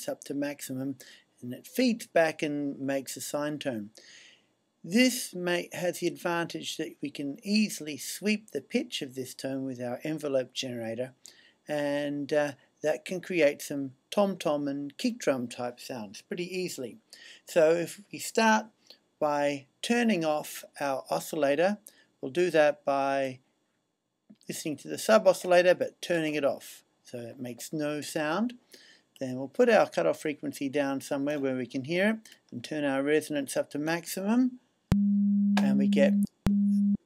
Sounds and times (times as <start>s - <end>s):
Speech: 0.0s - 4.0s, 4.9s - 23.4s, 24.4s - 28.6s, 29.2s - 34.6s, 35.6s - 36.3s.